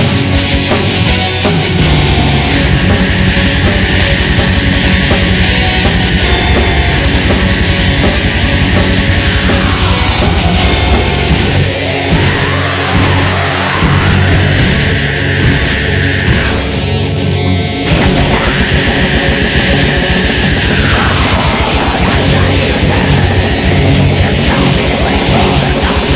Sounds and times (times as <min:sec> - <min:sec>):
Music: 0:00.0 - 0:26.1.